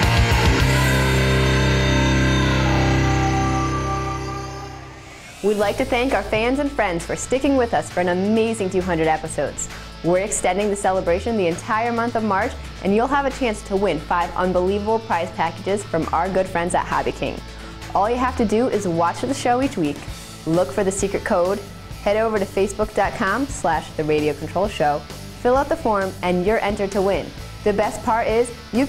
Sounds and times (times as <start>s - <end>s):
Music: 0.0s - 28.8s
Speech: 5.4s - 28.8s.